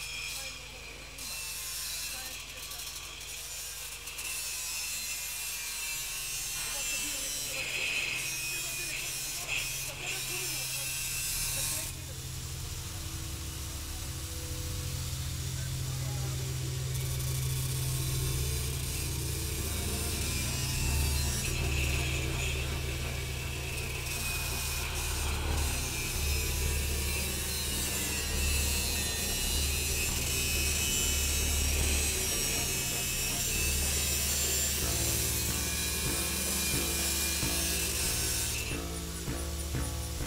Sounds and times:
Drum: 16.8s - 40.2s.

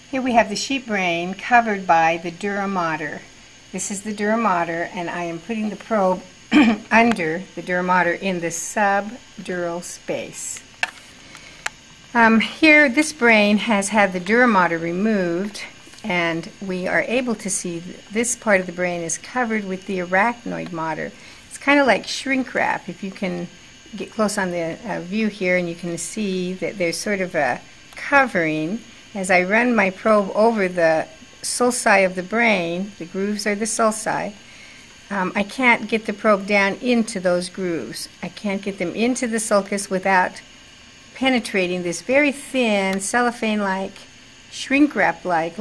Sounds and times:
Speech: 0.1s - 10.7s, 12.1s - 34.4s, 35.1s - 40.4s, 41.2s - 45.6s.

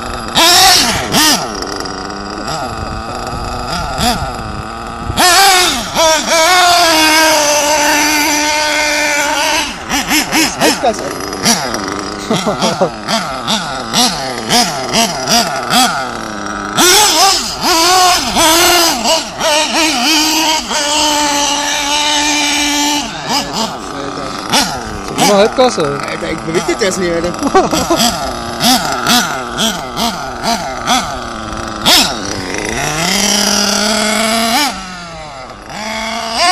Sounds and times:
Vehicle: 0.0s - 36.5s
Accelerating, revving, vroom: 0.2s - 1.6s, 3.5s - 23.8s, 26.6s - 36.5s
Speech: 25.2s - 27.5s.

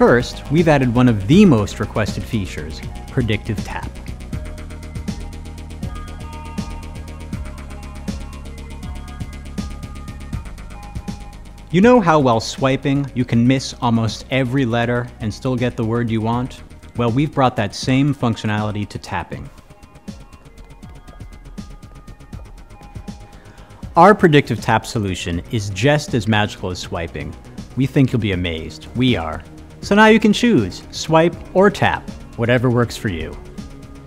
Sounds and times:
Speech: 0.0s - 4.0s, 11.8s - 19.5s, 24.0s - 33.4s
Music: 0.0s - 34.0s.

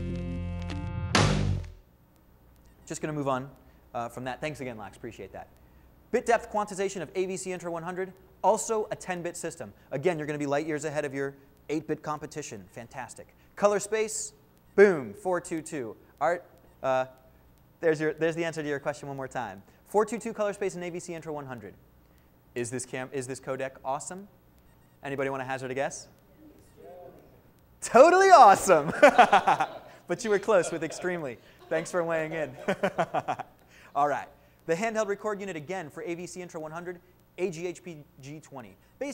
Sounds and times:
Speech: 2.9s - 5.5s, 6.2s - 17.2s, 17.8s - 21.8s, 22.6s - 24.3s, 25.0s - 28.9s, 30.1s - 32.7s, 34.0s - 39.1s.

